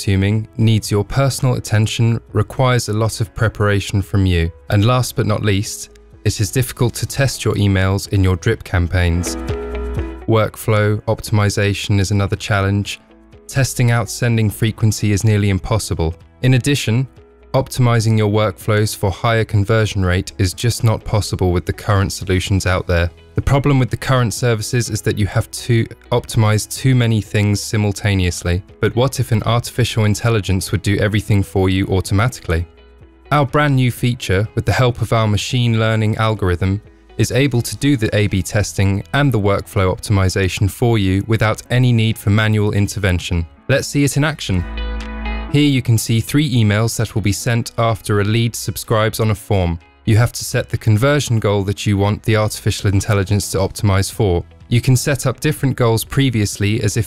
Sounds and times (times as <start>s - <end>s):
Speech: 0.0s - 9.4s, 10.2s - 32.7s, 33.3s - 44.7s, 45.5s - 57.0s.